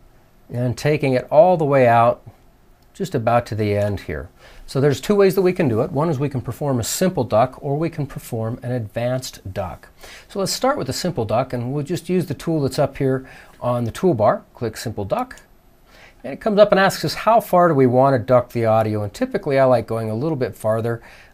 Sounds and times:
Speech: 0:00.5 - 0:02.4, 0:03.0 - 0:15.5, 0:16.2 - 0:21.0.

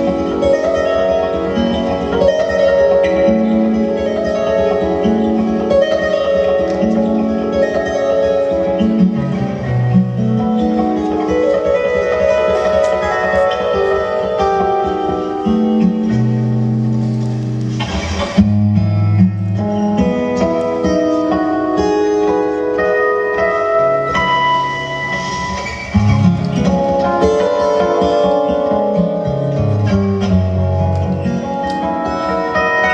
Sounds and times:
Electric guitar: 0:00.0 - 0:32.9.

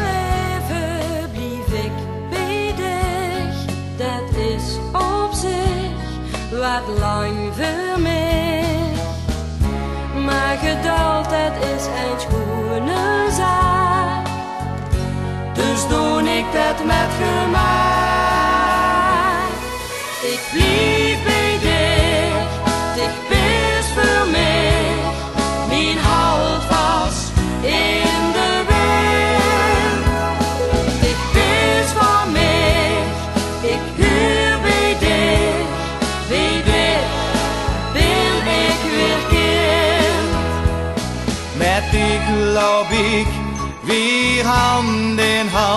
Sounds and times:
Music: 0:00.0 - 0:45.7.

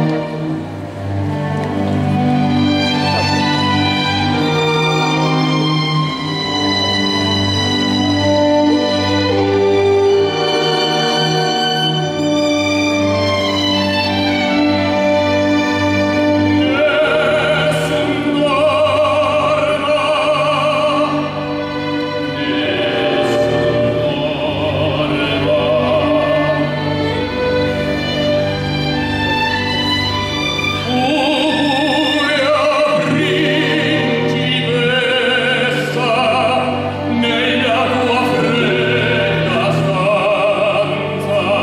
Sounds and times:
Opera: 0:00.0 - 0:41.6.

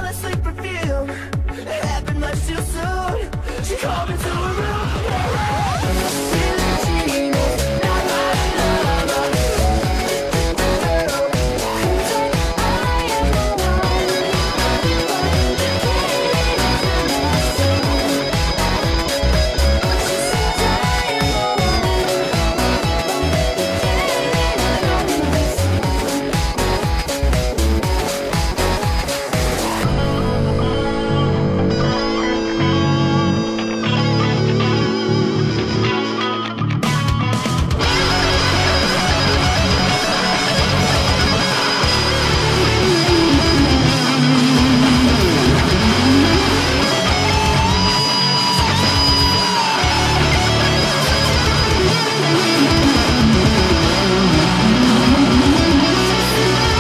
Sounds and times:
Guitar: 0:00.0 - 0:56.8.

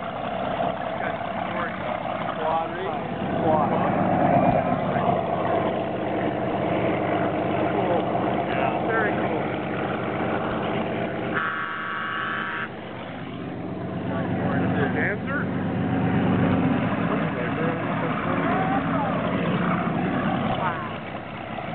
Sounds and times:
Motorboat, speedboat: 0:00.0 - 0:21.7
Speech: 0:01.0 - 0:04.0, 0:14.1 - 0:15.5, 0:17.2 - 0:19.4.

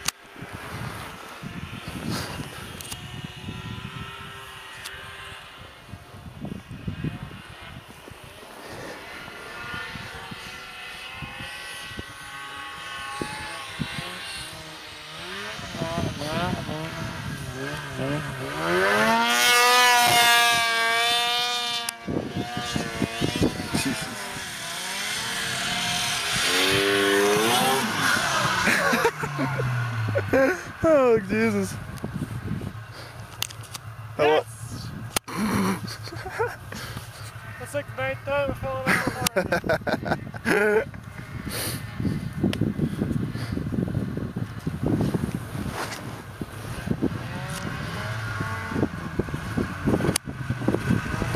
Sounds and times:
Speech: 0:30.8 - 0:31.8, 0:34.2 - 0:34.9, 0:37.5 - 0:39.5.

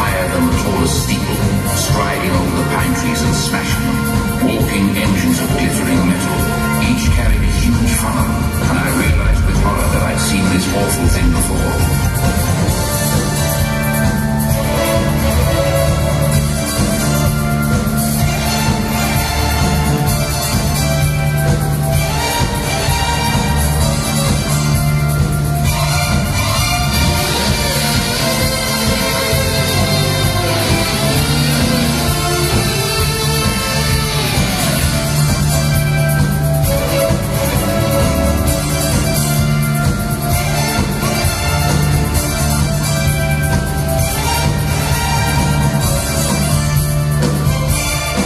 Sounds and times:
Funny music: 0:00.0 - 0:48.2.

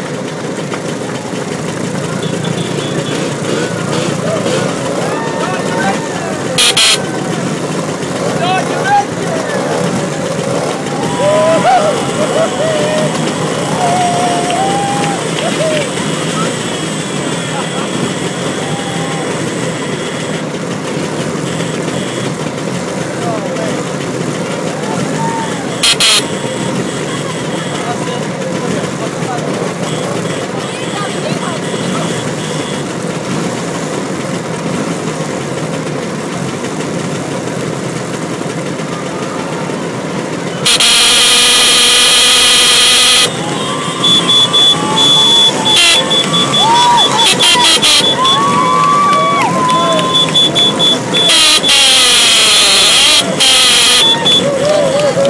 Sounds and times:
Motorcycle: 0:00.0 - 0:55.3.

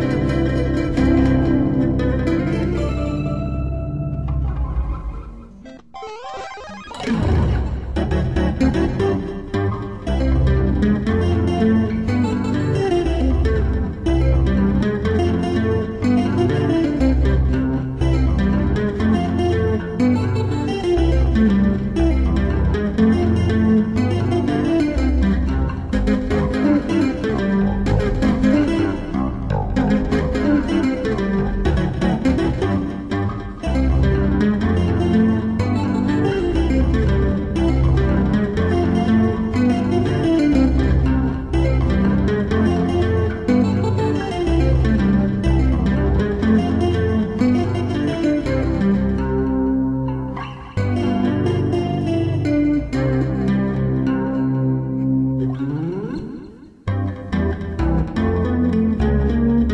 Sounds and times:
Electric guitar: 0:00.0 - 0:59.7
Tapping (guitar technique): 0:00.0 - 0:59.7.

